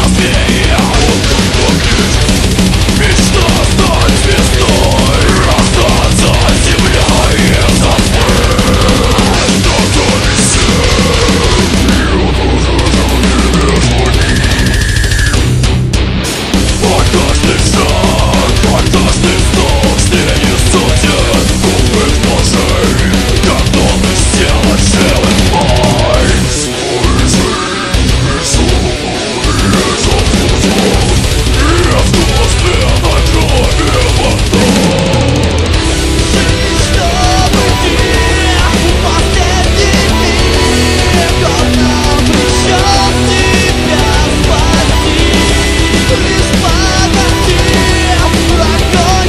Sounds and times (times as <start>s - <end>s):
Music: 0.0s - 49.2s.